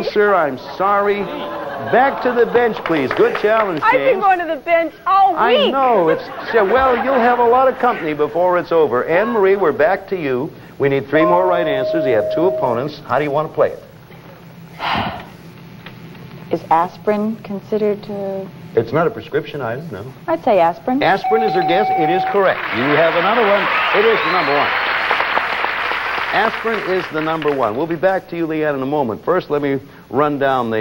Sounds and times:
Inside, large room or hall: 0.0 - 4.4, 5.0 - 16.7, 21.2 - 28.7.

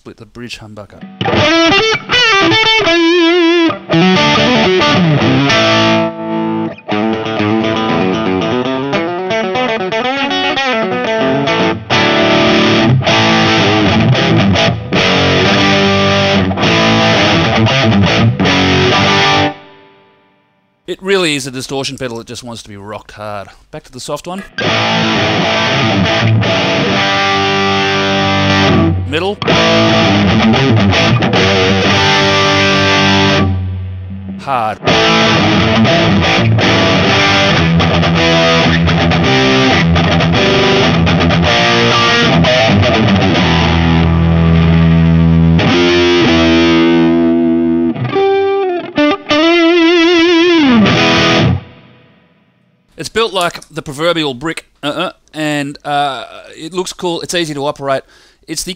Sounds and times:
Speech: 0.0 - 1.1, 20.9 - 24.5, 29.1 - 29.4, 34.4 - 34.8, 53.0 - 58.7
Distortion: 0.0 - 58.7
Guitar: 0.9 - 21.0, 24.3 - 58.7
Effects unit: 1.0 - 20.9, 24.4 - 53.0.

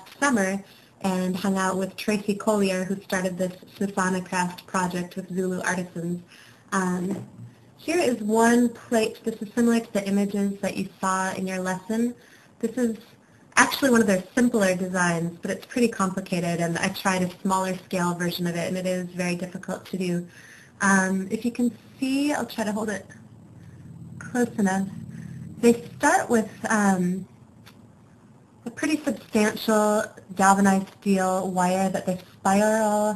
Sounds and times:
Speech: 0.0 - 23.2, 24.2 - 25.0, 25.6 - 27.3, 28.6 - 33.1.

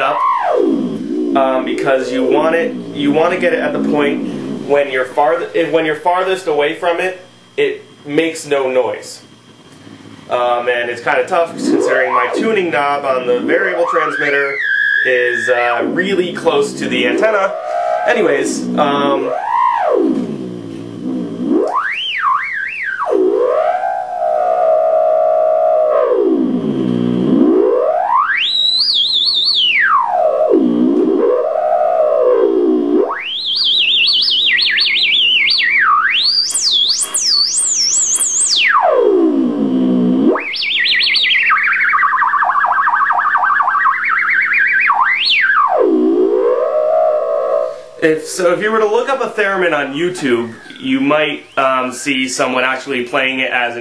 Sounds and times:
Theremin: 0.0 - 53.8.

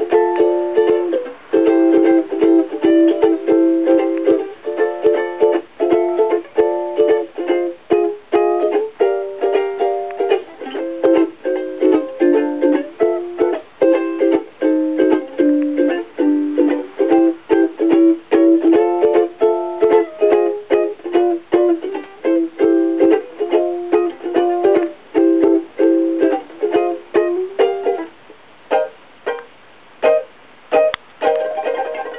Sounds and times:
Music: 0.0 - 32.1.

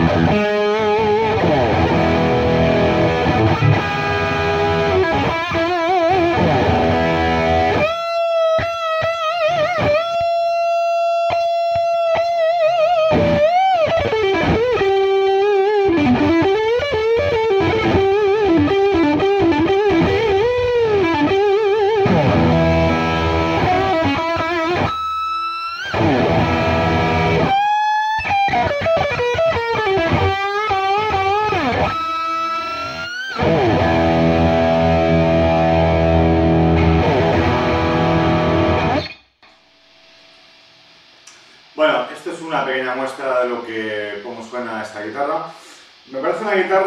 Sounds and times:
Rock music: 0.0 - 39.2
Electric guitar: 0.0 - 40.6.

